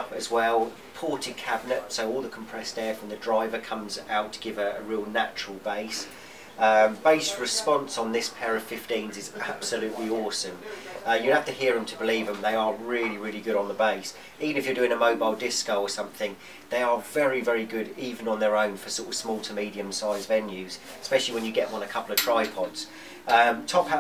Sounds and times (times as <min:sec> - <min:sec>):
Speech: 0:00.0 - 0:24.0.